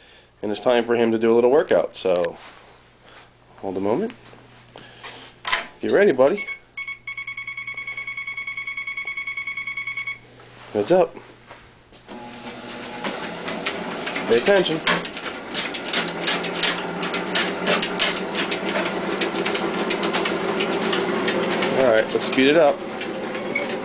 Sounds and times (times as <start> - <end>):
Speech: 0.4 - 2.4, 3.6 - 4.2, 5.8 - 6.5, 10.7 - 11.2, 14.3 - 14.9, 21.8 - 22.8
Buzzer: 6.4 - 10.3.